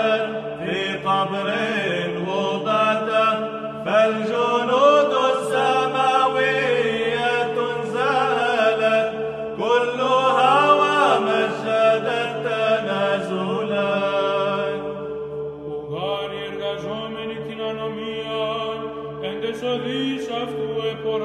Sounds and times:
Mantra: 0.0 - 21.2.

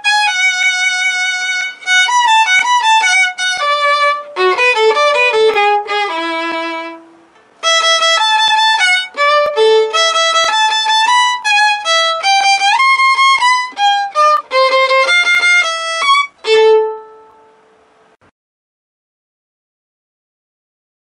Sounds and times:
Violin, fiddle: 0.0 - 17.6.

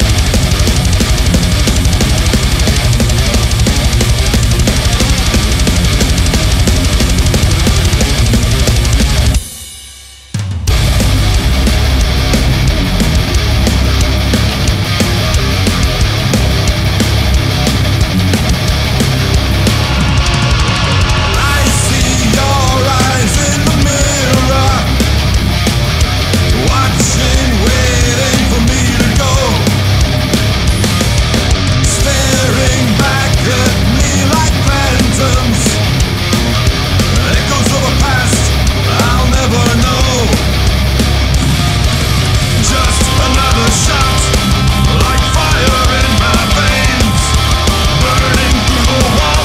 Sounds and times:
Heavy metal: 0.0 - 49.4.

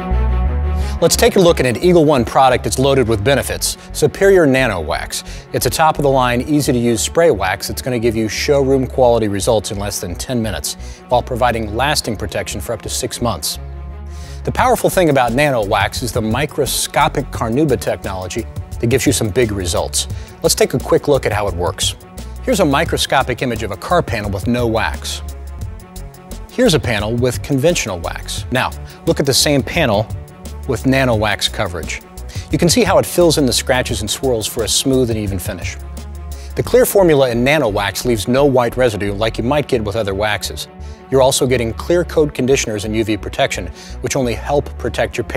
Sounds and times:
Music: 0.0 - 45.3
Speech: 1.0 - 13.6, 14.4 - 25.2, 26.5 - 35.8, 36.6 - 45.3.

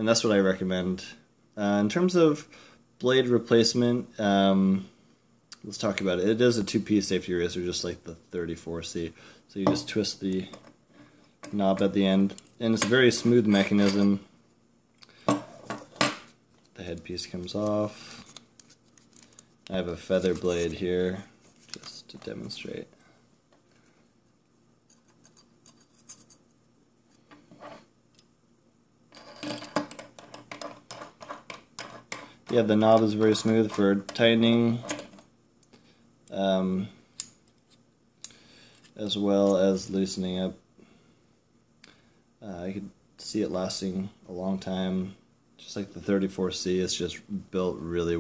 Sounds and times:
Speech: 0.0 - 4.9, 5.6 - 10.6, 11.5 - 14.3, 16.8 - 18.0, 19.7 - 23.0, 32.5 - 34.8, 36.3 - 37.0, 39.0 - 40.6, 42.4 - 48.2
Inside, small room: 0.0 - 48.2.

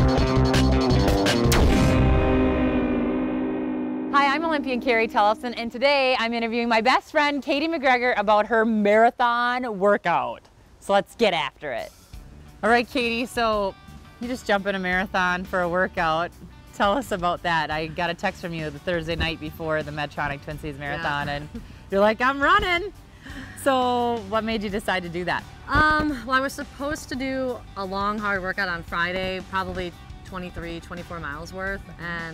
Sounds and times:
Music: 0.0 - 3.4, 4.1 - 7.8, 11.5 - 32.3
Outside, urban or manmade: 0.0 - 32.3.

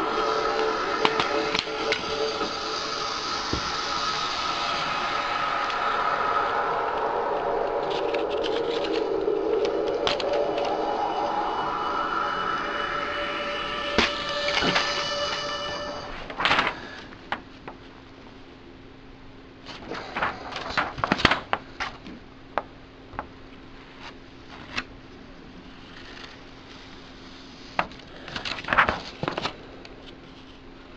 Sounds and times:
Crackle: 0.0 - 16.8
Music: 0.0 - 16.8.

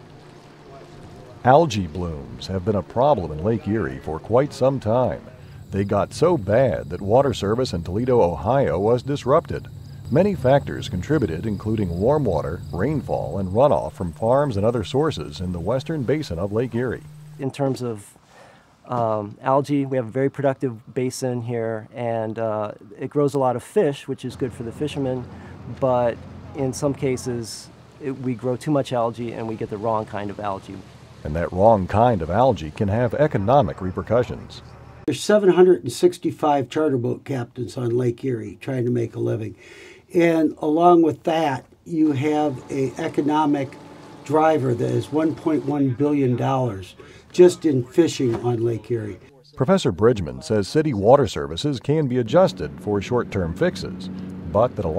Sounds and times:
Speech: 0.6 - 18.2, 18.9 - 54.9.

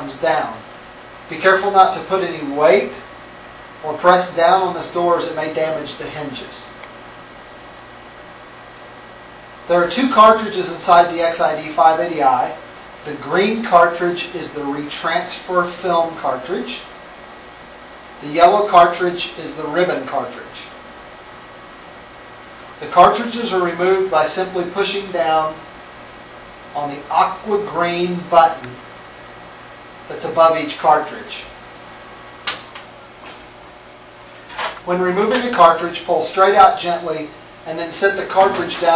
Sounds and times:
Speech: 0.0 - 0.7, 1.3 - 3.1, 3.8 - 6.8, 9.7 - 16.9, 18.2 - 20.8, 22.8 - 25.6, 26.8 - 28.8, 30.1 - 31.6, 34.8 - 38.9.

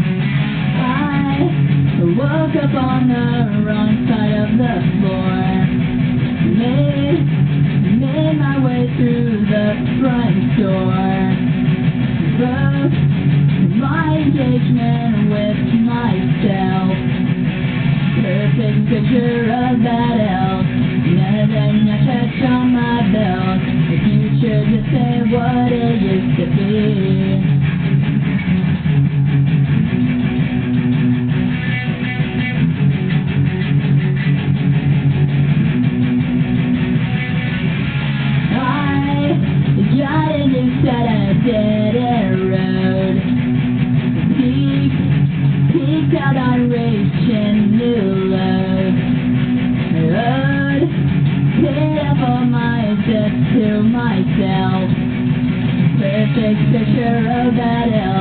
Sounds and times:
Electric guitar: 0.0 - 58.2.

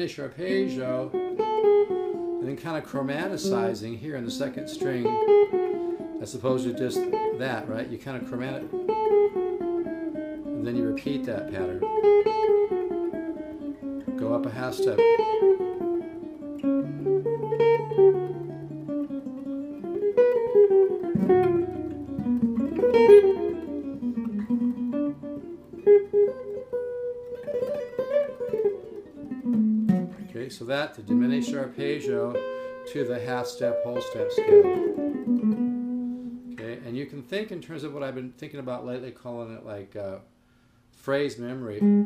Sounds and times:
Tapping (guitar technique): 0.4 - 37.0.

